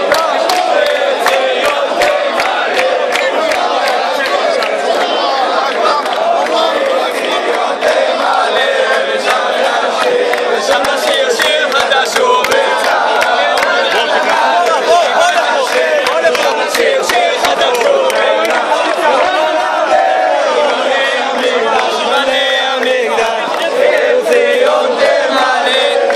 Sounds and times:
Choir: 0.0 - 26.1
Speech: 3.2 - 7.4, 10.6 - 19.8
Male singing: 5.8 - 26.1.

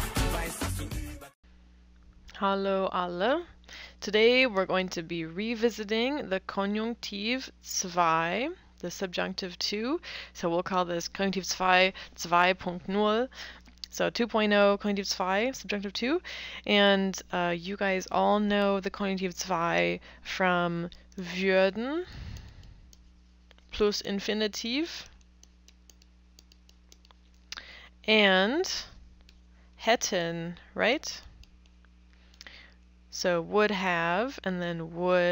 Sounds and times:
Speech: 2.3 - 13.3, 13.9 - 22.1, 23.8 - 25.1, 28.1 - 28.9, 29.8 - 31.2, 33.1 - 35.3.

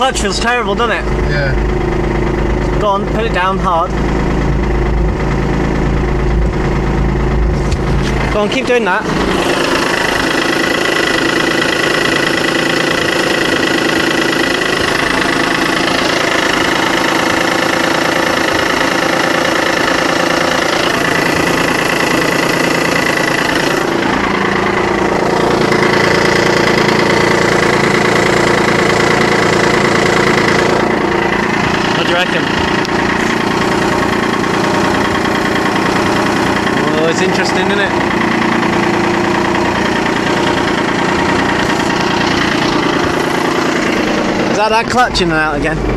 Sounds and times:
Speech: 0.0 - 1.6, 8.4 - 9.1, 32.0 - 32.5, 36.8 - 38.0, 44.6 - 45.8
Car: 0.0 - 45.9
Idling: 0.0 - 45.9
Medium engine (mid frequency): 0.0 - 45.9.

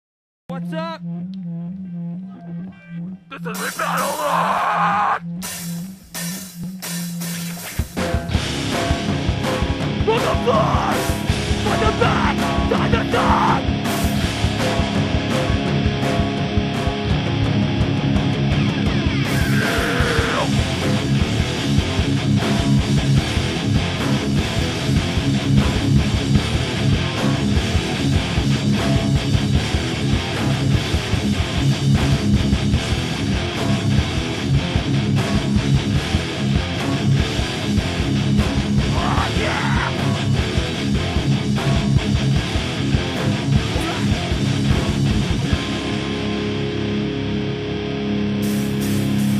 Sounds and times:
Speech: 0.5 - 1.0, 2.3 - 4.6, 10.0 - 11.0, 11.6 - 13.6, 43.7 - 44.2
Music: 0.5 - 49.3.

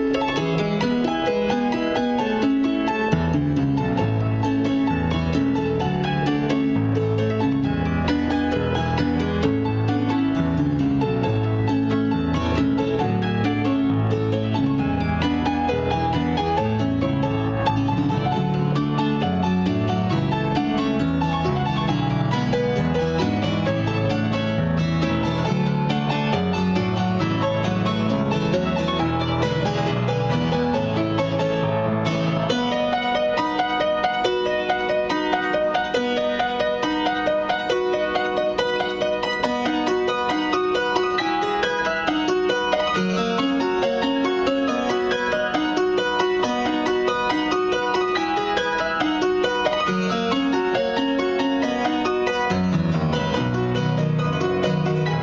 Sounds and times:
Happy music: 0.0 - 55.2.

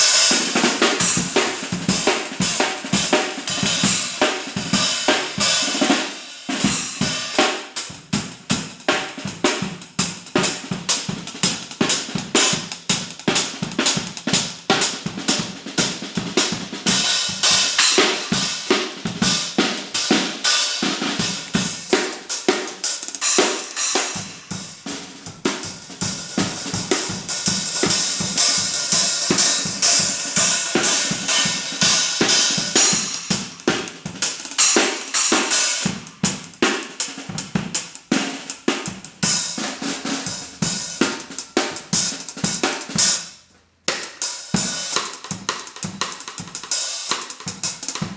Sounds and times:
Drum: 0.0 - 48.1
Drum kit: 0.0 - 48.1.

